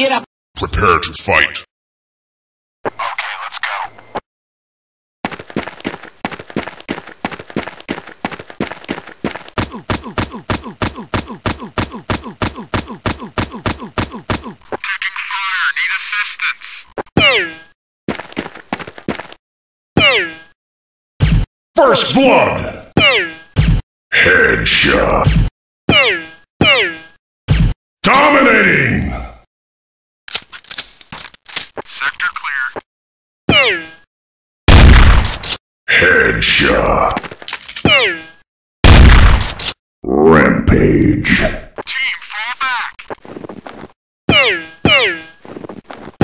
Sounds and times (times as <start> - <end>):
Speech: 0.0 - 1.7, 14.8 - 17.6, 21.8 - 23.3, 24.2 - 25.3, 28.0 - 29.2, 31.9 - 32.8, 35.9 - 37.2, 40.1 - 43.0.